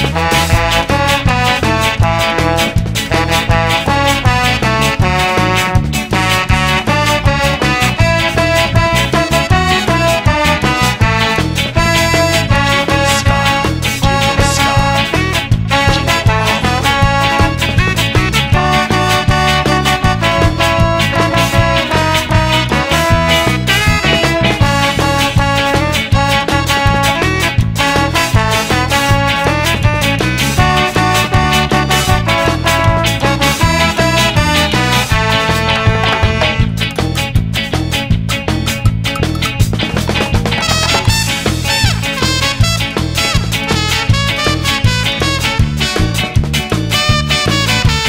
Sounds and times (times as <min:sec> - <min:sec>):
Music: 0:00.0 - 0:48.0.